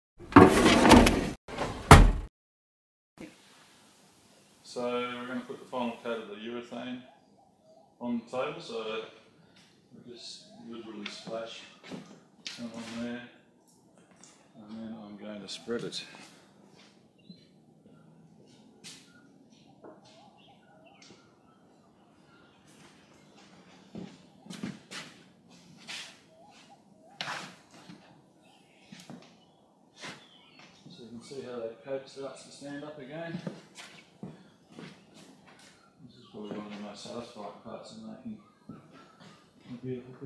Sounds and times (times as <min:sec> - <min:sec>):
Speech: 0:04.6 - 0:07.1, 0:08.0 - 0:09.2, 0:10.0 - 0:11.8, 0:12.5 - 0:13.4, 0:14.6 - 0:16.3, 0:30.9 - 0:33.5, 0:36.0 - 0:38.4, 0:39.7 - 0:40.2.